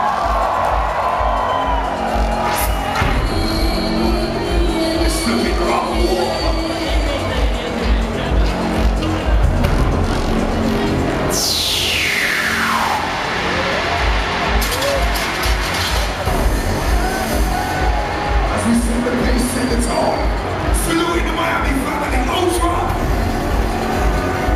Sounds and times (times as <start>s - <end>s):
Background music: 0.0s - 24.5s
Exciting music: 0.0s - 24.5s.